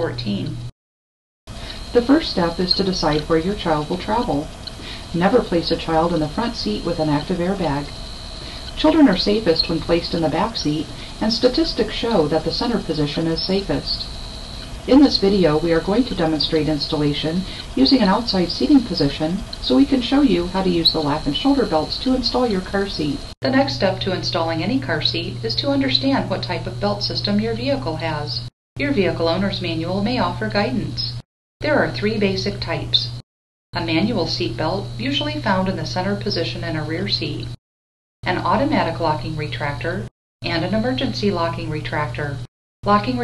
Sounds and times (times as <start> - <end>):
Speech: 0.0 - 0.6, 1.7 - 7.9, 8.7 - 14.1, 14.9 - 33.2, 33.8 - 37.6, 38.2 - 43.2.